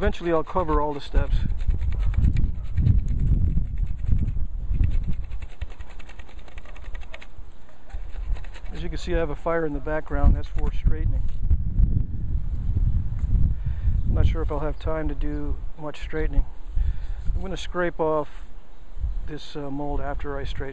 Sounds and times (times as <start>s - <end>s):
Speech: 0.0s - 1.5s, 8.7s - 11.3s, 14.2s - 16.5s, 17.4s - 18.4s, 19.3s - 20.7s.